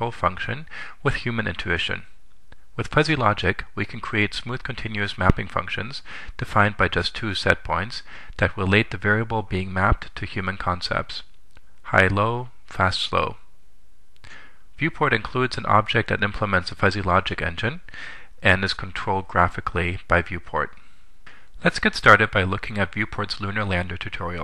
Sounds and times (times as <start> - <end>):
Speech: 0.0 - 2.2, 2.8 - 13.5, 14.8 - 20.8, 21.6 - 24.4.